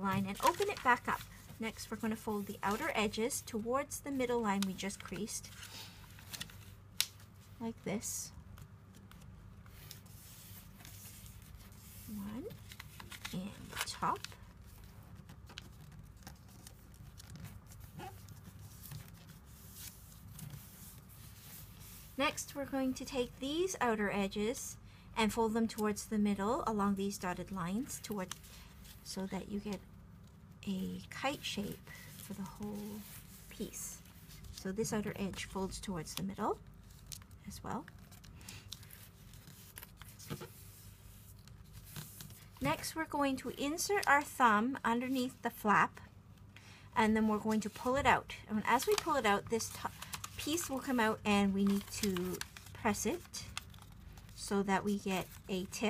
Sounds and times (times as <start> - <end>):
Speech: 0.0 - 5.5, 7.6 - 8.3, 12.1 - 12.6, 13.3 - 14.3, 22.2 - 28.3, 29.1 - 29.8, 30.6 - 34.0, 34.6 - 36.6, 37.4 - 37.9, 42.6 - 46.0, 47.0 - 53.5, 54.4 - 55.8.